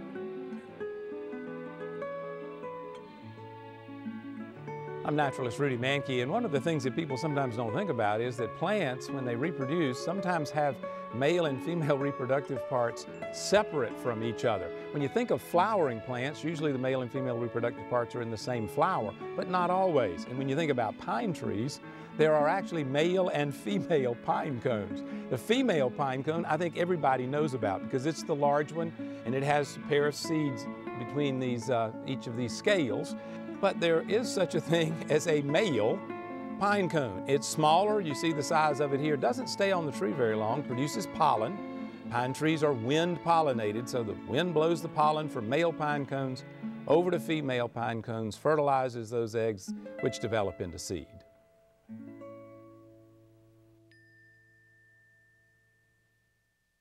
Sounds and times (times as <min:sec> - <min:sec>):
Music: 0:00.0 - 0:56.8
Male speech, man speaking: 0:05.1 - 0:36.0, 0:36.6 - 0:41.5, 0:42.2 - 0:51.2.